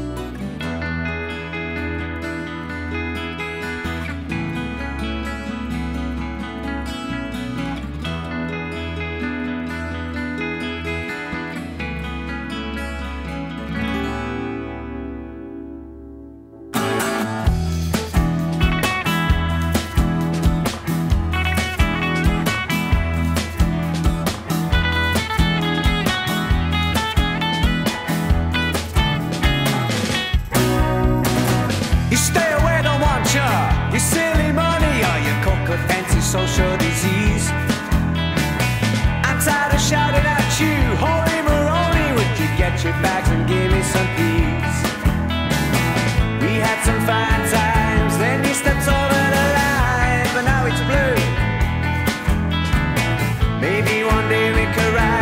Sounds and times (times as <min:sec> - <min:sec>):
Soundtrack music: 0:00.3 - 0:55.2.